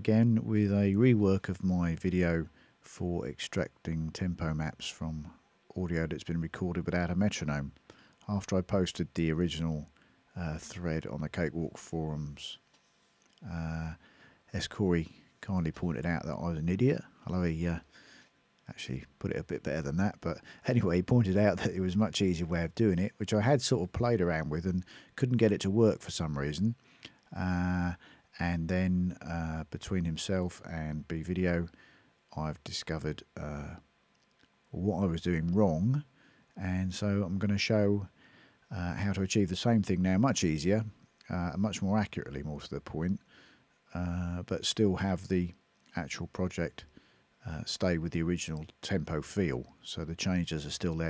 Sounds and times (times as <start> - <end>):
Speech: 0.0 - 12.6, 13.4 - 17.9, 18.7 - 33.8, 34.7 - 38.1, 38.7 - 43.2, 43.9 - 51.0.